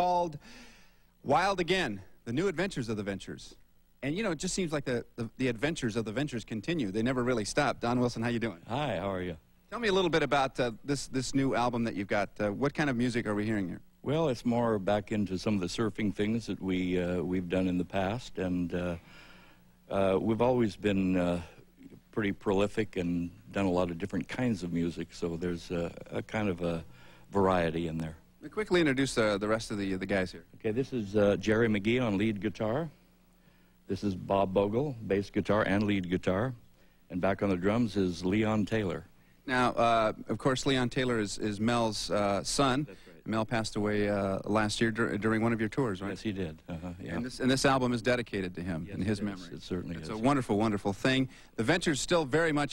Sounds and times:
Speech: 0.0 - 0.4, 1.2 - 19.0, 19.9 - 33.0, 33.9 - 52.7.

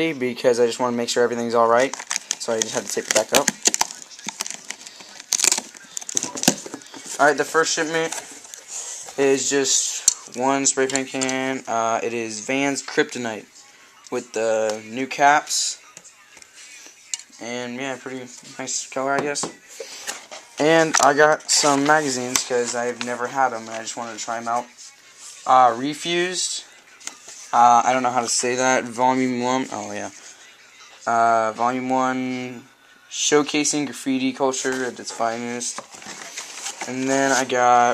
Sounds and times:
Speech: 0.0 - 8.3, 9.2 - 15.9, 17.4 - 19.7, 20.6 - 26.7, 27.5 - 30.2, 30.8 - 35.8, 36.8 - 37.9.

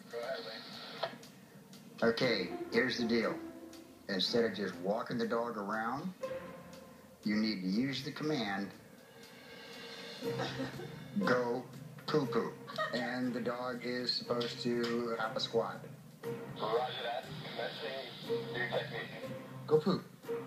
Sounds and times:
Music: 0.0 - 20.4
Speech: 2.0 - 3.4, 4.1 - 6.2, 7.2 - 8.8, 11.2 - 15.8, 16.7 - 20.1.

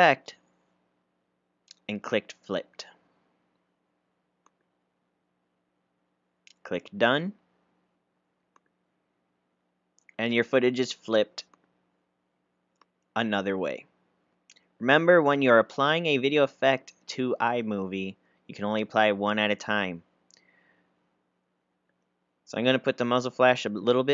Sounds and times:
Speech: 0.0 - 0.4, 1.7 - 3.0, 6.5 - 7.4, 10.1 - 11.5, 13.2 - 13.9, 14.8 - 20.1, 22.5 - 24.1.

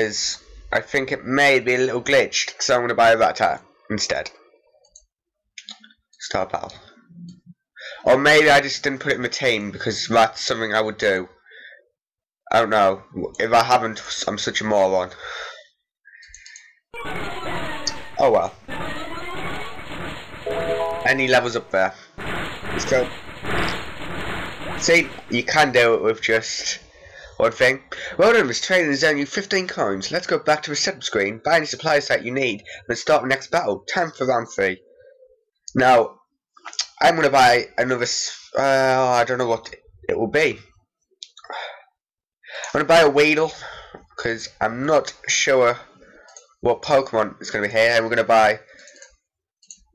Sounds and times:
Speech: 0.0 - 4.4, 6.2 - 6.9, 8.0 - 11.4, 12.5 - 15.2, 17.8 - 18.6, 21.0 - 22.0, 24.8 - 34.9, 35.7 - 36.2, 36.8 - 40.7, 42.7 - 45.9, 46.6 - 48.7.

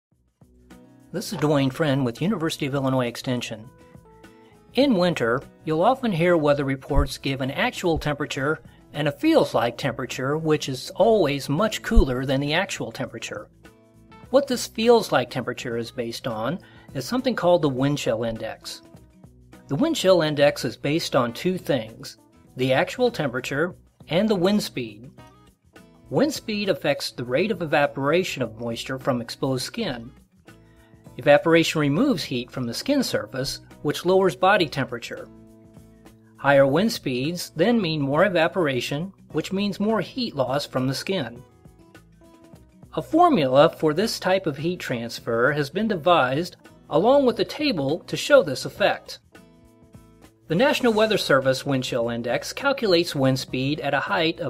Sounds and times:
Music: 0.1 - 54.4
Speech: 1.2 - 3.7, 4.8 - 13.5, 14.3 - 18.9, 19.7 - 25.1, 26.1 - 30.2, 31.2 - 35.3, 36.4 - 41.4, 43.0 - 49.2, 50.5 - 54.4.

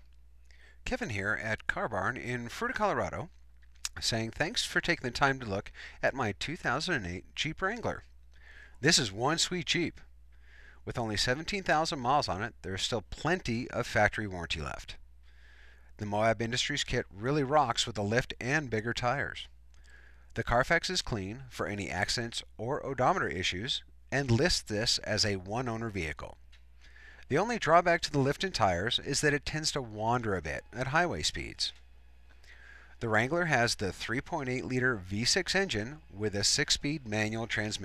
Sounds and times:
Speech: 0.9 - 3.3, 3.9 - 8.0, 8.8 - 10.0, 10.8 - 15.0, 16.0 - 19.5, 20.4 - 26.4, 27.3 - 31.8, 33.0 - 37.8.

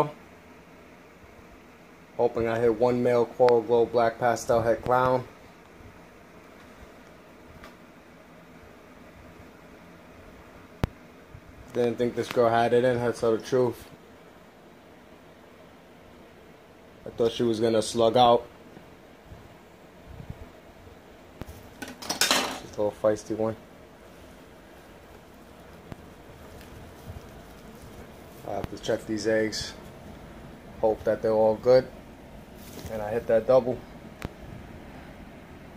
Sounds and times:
Speech: 0.0 - 0.2, 2.2 - 5.4, 11.7 - 13.9, 17.0 - 18.5, 22.6 - 23.6, 28.4 - 29.9, 30.8 - 32.0, 32.8 - 33.9
Inside, small room: 0.0 - 35.7.

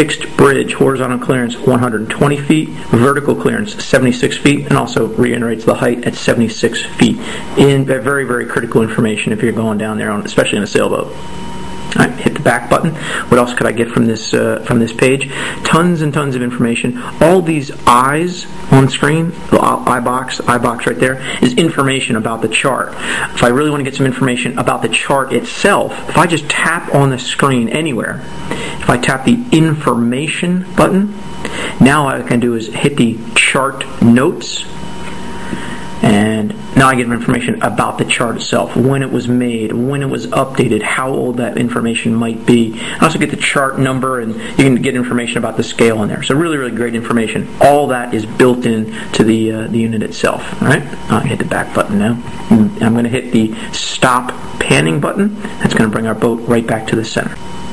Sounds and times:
Speech: 0.0 - 11.2, 11.9 - 31.2, 31.8 - 34.8, 36.0 - 57.4.

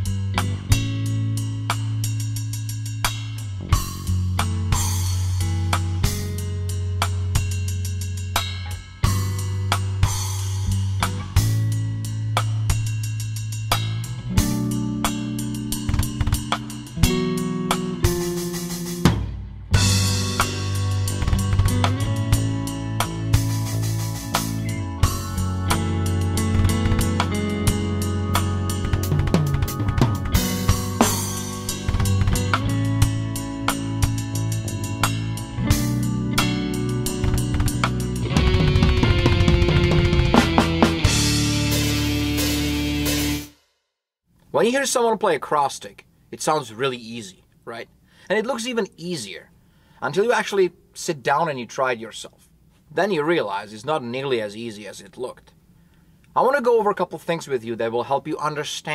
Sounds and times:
Bass drum: 0.0 - 43.5
Drum kit: 0.0 - 43.6.

